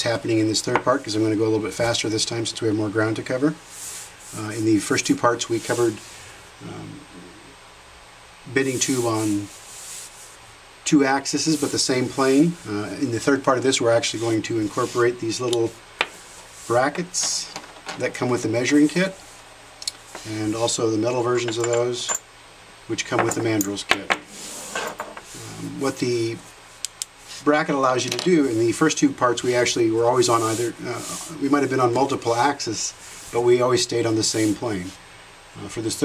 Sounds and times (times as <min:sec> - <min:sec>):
Speech: 0:00.0 - 0:03.6, 0:04.3 - 0:06.0, 0:06.6 - 0:07.4, 0:08.5 - 0:09.5, 0:10.8 - 0:15.8, 0:16.7 - 0:19.2, 0:20.2 - 0:22.2, 0:22.9 - 0:24.2, 0:25.4 - 0:26.5, 0:27.4 - 0:35.0, 0:35.6 - 0:36.0.